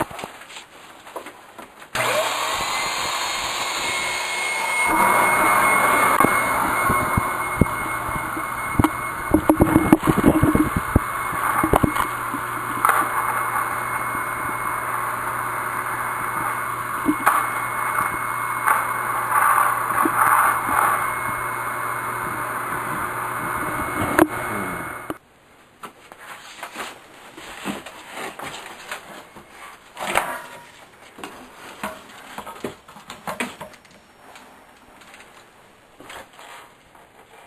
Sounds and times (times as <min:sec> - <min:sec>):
Vacuum cleaner: 0:02.0 - 0:25.2.